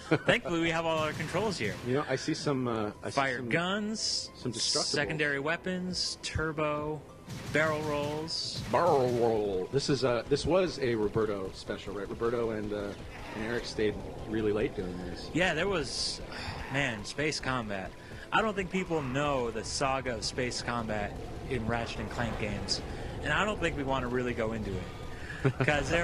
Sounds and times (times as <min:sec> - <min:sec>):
Speech: 0:00.1 - 0:24.9, 0:25.5 - 0:26.0.